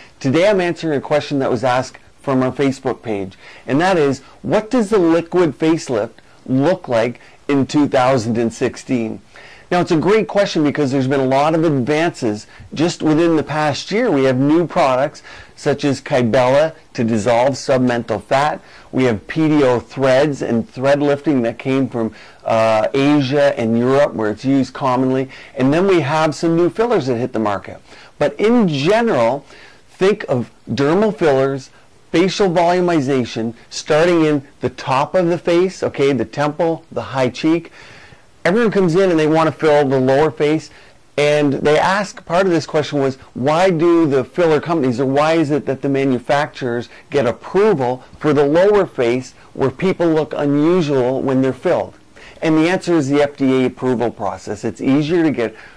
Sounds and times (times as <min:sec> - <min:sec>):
Speech: 0:00.0 - 0:37.7, 0:38.4 - 0:55.6.